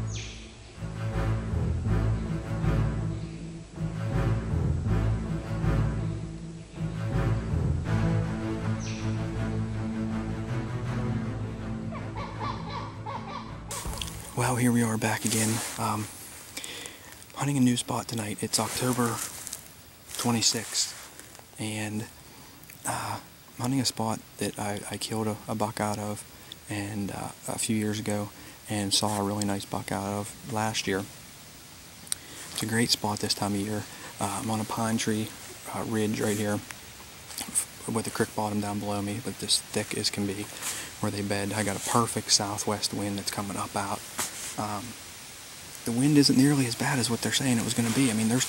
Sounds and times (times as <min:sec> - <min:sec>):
Speech: 0:14.3 - 0:16.1, 0:17.4 - 0:19.3, 0:20.2 - 0:21.0, 0:21.6 - 0:22.1, 0:22.9 - 0:31.1, 0:32.6 - 0:36.6, 0:37.4 - 0:44.0, 0:44.6 - 0:45.0, 0:45.8 - 0:48.4.